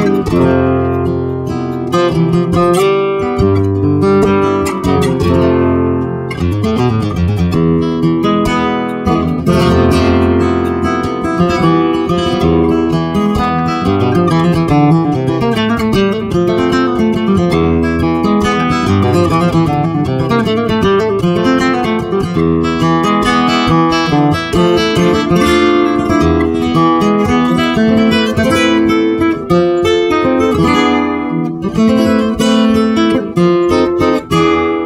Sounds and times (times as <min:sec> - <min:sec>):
Acoustic guitar: 0:00.0 - 0:34.8
Strum: 0:00.0 - 0:34.8.